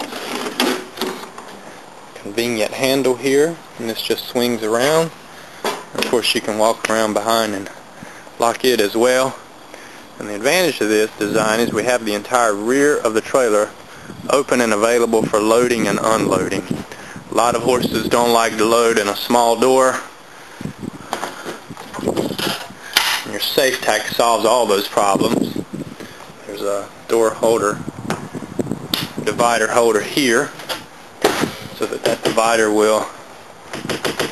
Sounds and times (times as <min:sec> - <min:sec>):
Outside, rural or natural: 0:00.0 - 0:34.3
Speech: 0:02.2 - 0:05.2, 0:06.0 - 0:07.8, 0:08.4 - 0:09.4, 0:10.2 - 0:13.7, 0:14.3 - 0:16.7, 0:17.3 - 0:20.1, 0:23.3 - 0:25.6, 0:26.4 - 0:27.8, 0:29.3 - 0:30.6, 0:31.8 - 0:33.2.